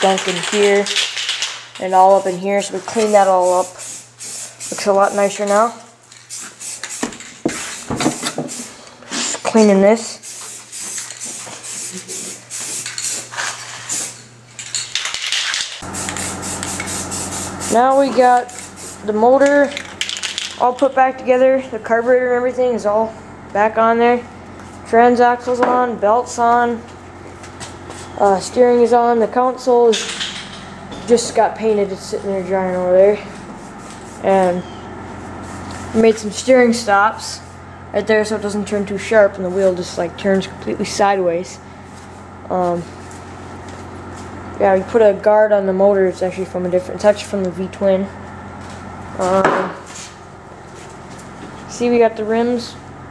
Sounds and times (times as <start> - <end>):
Speech: 0.0 - 1.0, 1.8 - 3.8, 4.7 - 5.9, 9.5 - 10.2, 17.7 - 19.8, 20.6 - 24.3, 24.9 - 26.9, 28.2 - 30.1, 31.1 - 33.4, 34.2 - 34.7, 35.9 - 37.4, 38.0 - 41.6, 42.5 - 42.9, 44.6 - 48.1, 49.2 - 49.8, 51.7 - 52.8.